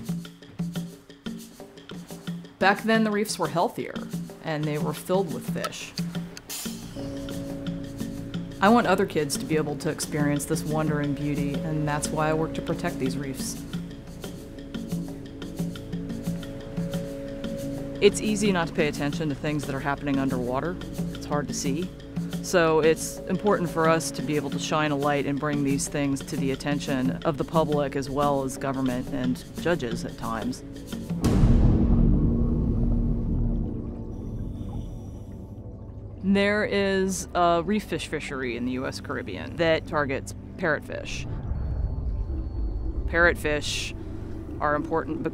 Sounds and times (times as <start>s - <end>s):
Music: 0.0s - 45.3s
Speech: 2.6s - 5.9s, 8.6s - 13.6s, 18.0s - 21.9s, 22.5s - 30.6s, 36.2s - 41.3s, 43.1s - 44.0s, 44.6s - 45.3s.